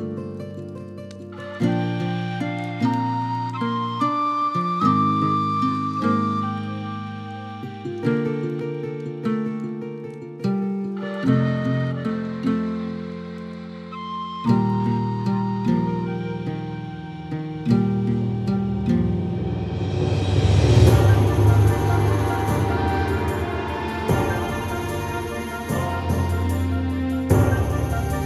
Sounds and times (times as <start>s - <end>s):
Music: 0.0s - 28.2s.